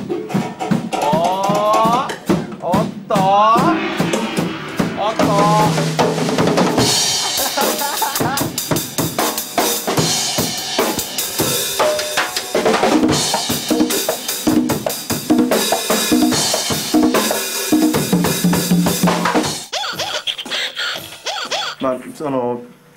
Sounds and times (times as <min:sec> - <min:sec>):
Drum kit: 0:00.0 - 0:20.2.